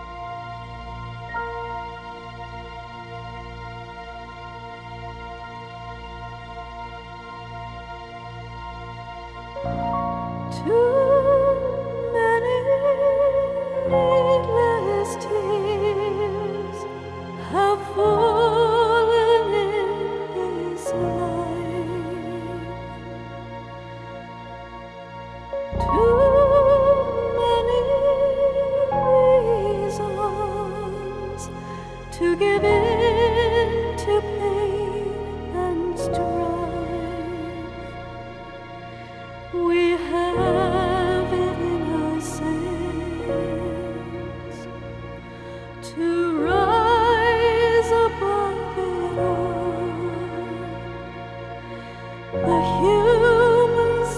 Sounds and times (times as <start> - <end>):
Music: 0.0 - 54.1.